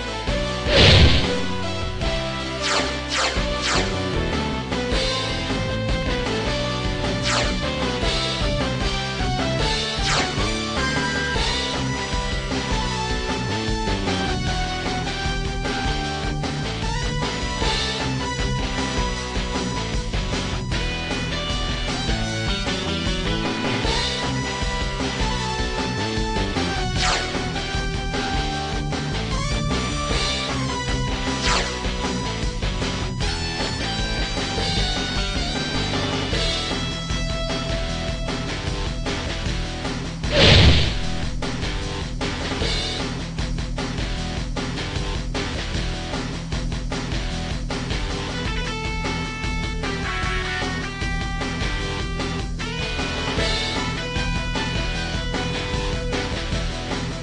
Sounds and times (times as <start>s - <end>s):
Music: 0.0s - 57.2s.